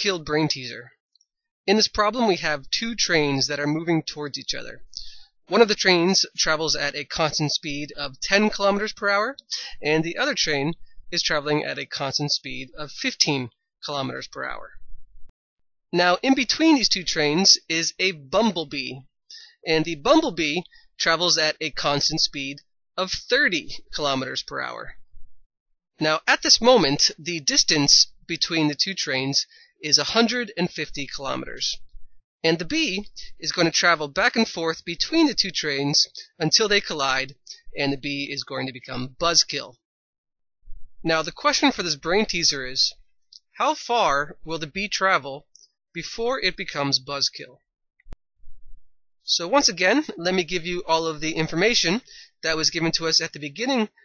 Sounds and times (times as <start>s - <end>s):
Narration, monologue: 0.0s - 15.4s, 16.0s - 39.8s, 40.6s - 54.0s.